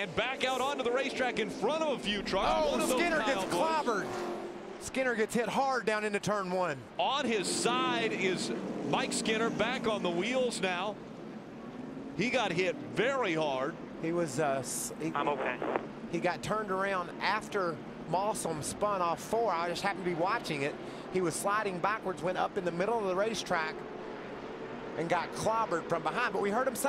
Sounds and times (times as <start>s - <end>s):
Speech: 0.0s - 4.0s, 4.8s - 11.0s, 12.2s - 23.8s, 25.0s - 26.8s
Car: 0.0s - 26.8s.